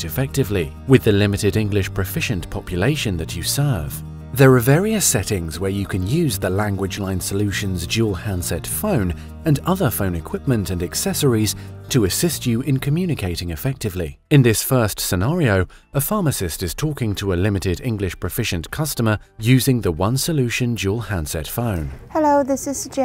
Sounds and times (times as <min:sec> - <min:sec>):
Music: 0:00.0 - 0:23.0
Speech: 0:00.0 - 0:23.0.